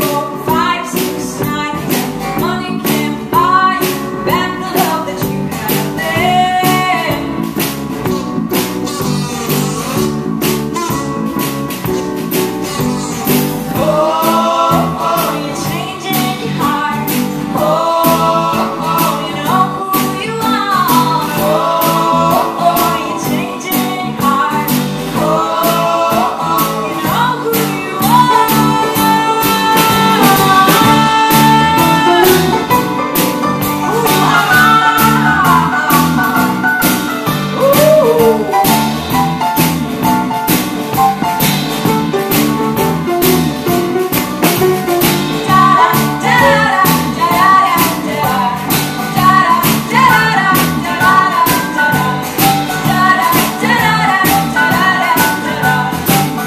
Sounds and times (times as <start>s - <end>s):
Singing: 13.7s - 32.6s, 33.8s - 36.9s, 45.5s - 56.4s.